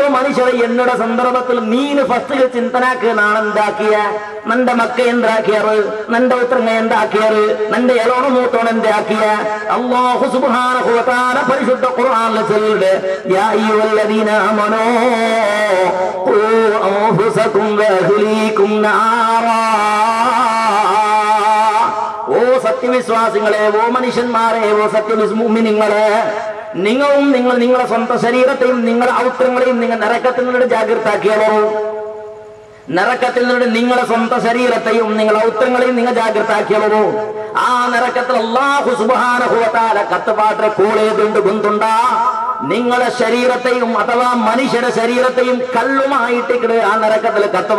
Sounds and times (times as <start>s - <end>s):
Male speech, man speaking: 0.0s - 31.9s, 32.9s - 47.7s.